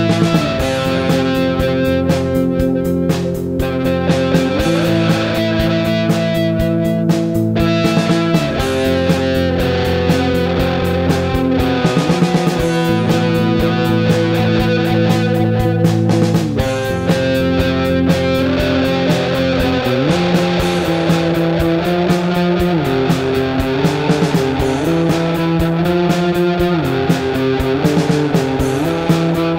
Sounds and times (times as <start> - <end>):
Rock music: 0.0 - 29.5.